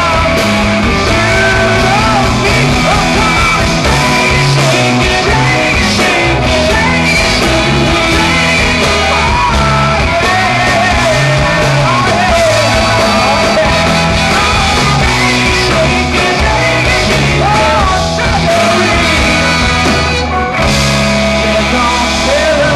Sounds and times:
Singing: 0:00.0 - 0:20.1
Inside, large room or hall: 0:00.0 - 0:22.7
Music: 0:00.0 - 0:22.7.

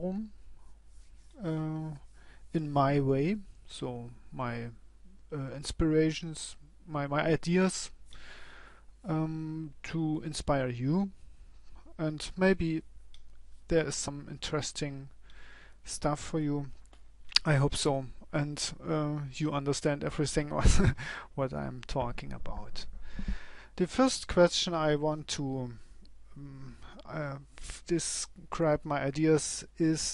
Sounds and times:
Speech: 0:00.0 - 0:00.4, 0:01.4 - 0:08.0, 0:09.0 - 0:11.2, 0:11.9 - 0:12.8, 0:13.7 - 0:15.2, 0:15.9 - 0:16.8, 0:17.4 - 0:22.9, 0:23.8 - 0:25.8, 0:26.4 - 0:30.1.

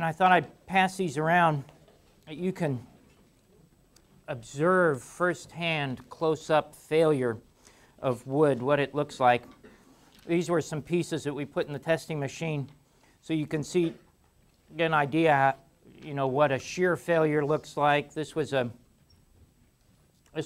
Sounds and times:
Speech: 0:00.0 - 0:01.7, 0:02.3 - 0:02.9, 0:04.3 - 0:07.4, 0:08.0 - 0:09.5, 0:10.3 - 0:14.0, 0:14.7 - 0:18.8.

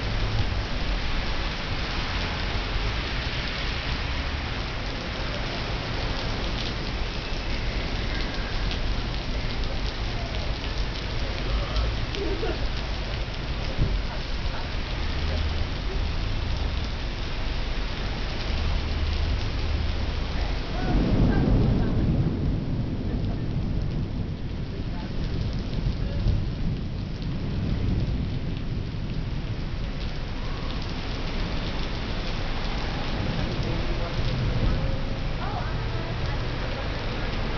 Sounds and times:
Rain on surface: 0:00.0 - 0:37.5.

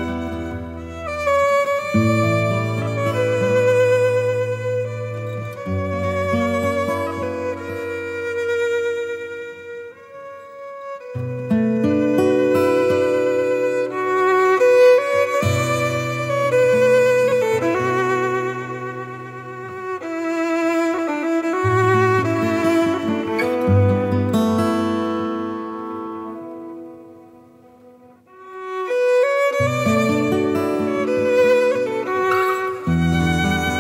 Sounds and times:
Violin, fiddle: 0:00.0 - 0:33.8.

